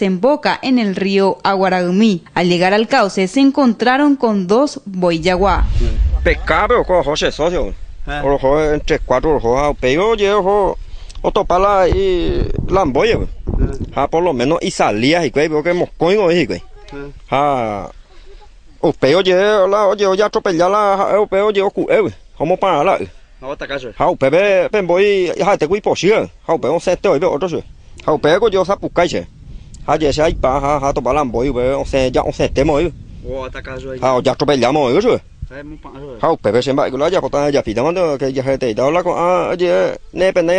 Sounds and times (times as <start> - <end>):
Outside, rural or natural: 0.0 - 40.5
Speech: 5.0 - 17.9.